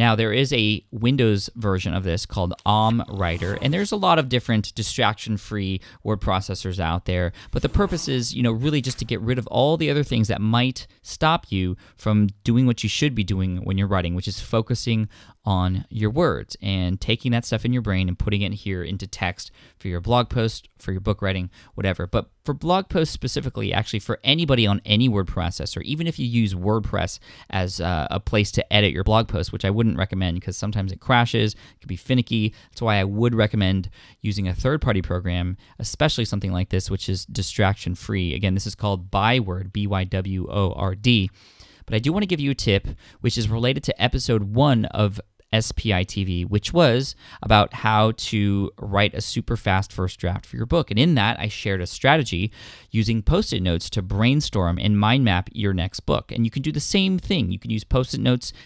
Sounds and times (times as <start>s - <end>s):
Speech: 0.0s - 58.6s.